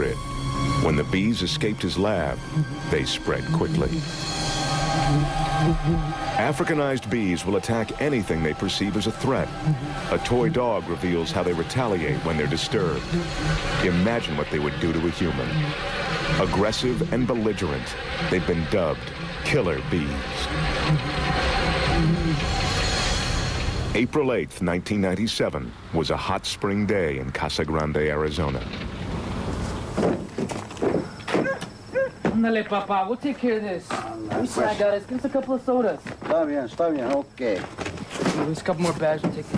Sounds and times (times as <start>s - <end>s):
Speech: 0.8s - 4.0s, 6.4s - 9.5s, 10.2s - 13.0s, 13.8s - 15.6s, 16.4s - 20.5s, 24.0s - 28.7s.